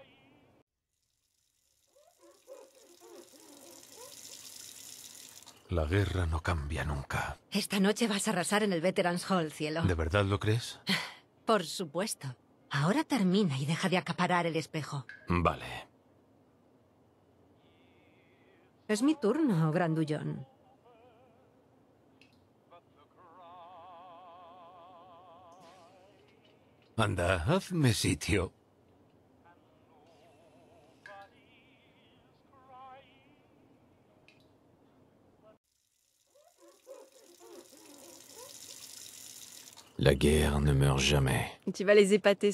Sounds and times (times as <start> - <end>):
Speech: 5.7 - 10.8, 11.5 - 15.9, 18.9 - 20.4, 27.0 - 28.5, 40.0 - 42.5.